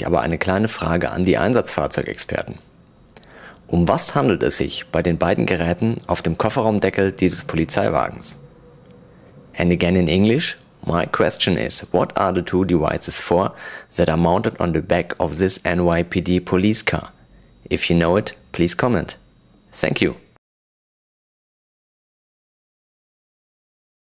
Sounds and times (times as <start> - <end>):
Speech: 0.0 - 2.7, 3.7 - 8.4, 9.6 - 20.4.